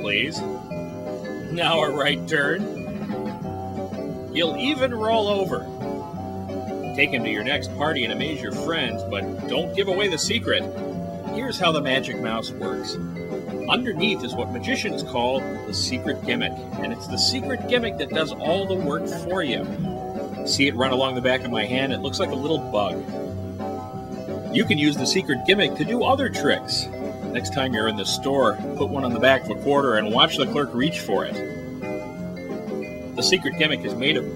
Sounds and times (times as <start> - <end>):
Speech: 0.0 - 0.5, 1.5 - 2.7, 4.4 - 5.6, 6.9 - 10.7, 11.3 - 13.0, 13.6 - 19.8, 20.5 - 23.1, 24.6 - 31.4, 33.2 - 34.3
Music: 0.0 - 34.3.